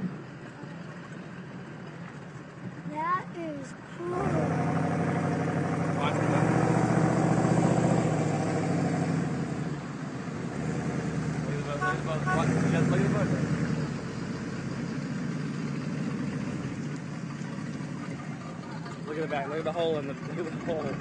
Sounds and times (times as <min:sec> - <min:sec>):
Vehicle: 0:00.0 - 0:21.0
Speech: 0:18.7 - 0:21.0.